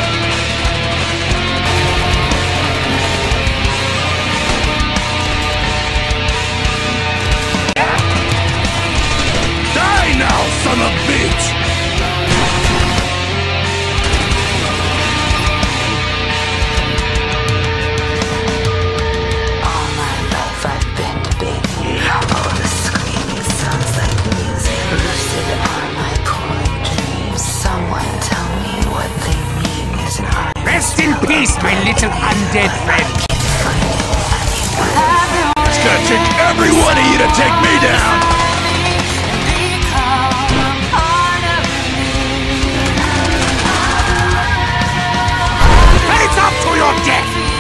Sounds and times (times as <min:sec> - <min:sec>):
Music: 0:00.0 - 0:47.6.